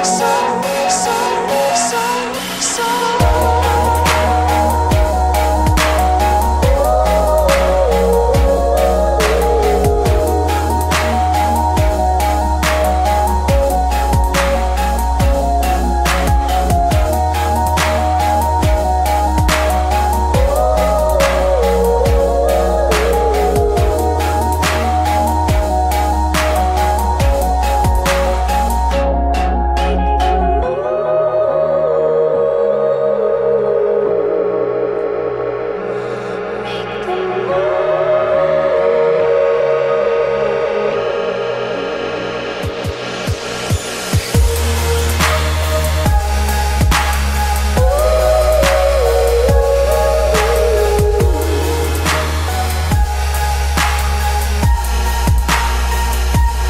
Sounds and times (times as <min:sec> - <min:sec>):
Ambient music: 0:00.0 - 0:56.7.